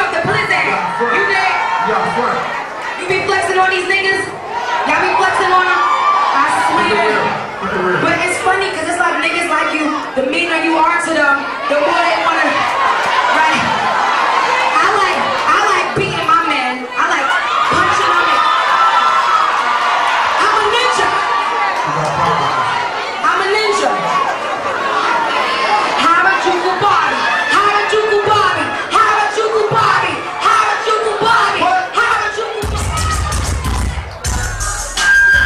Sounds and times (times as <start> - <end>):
Inside, public space: 0.0 - 35.4.